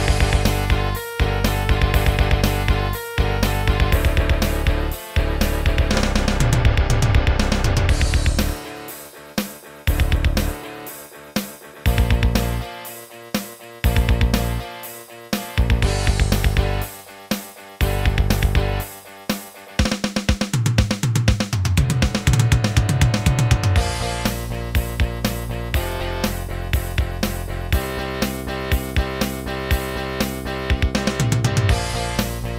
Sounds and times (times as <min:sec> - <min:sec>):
Music: 0:00.0 - 0:32.5.